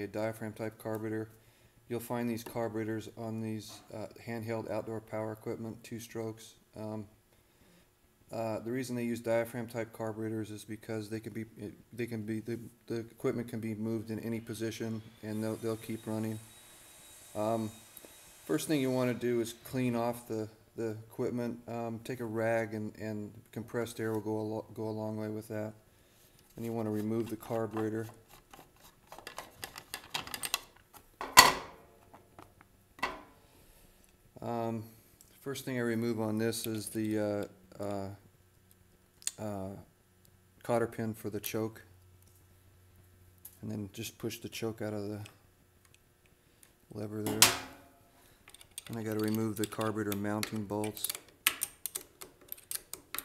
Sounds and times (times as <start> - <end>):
Speech: 0.0 - 1.3, 1.9 - 7.1, 8.3 - 16.4, 17.4 - 17.8, 18.5 - 25.8, 26.6 - 28.2, 34.4 - 38.2, 39.3 - 39.9, 40.6 - 41.9, 43.6 - 45.4, 46.9 - 47.6, 48.9 - 51.2.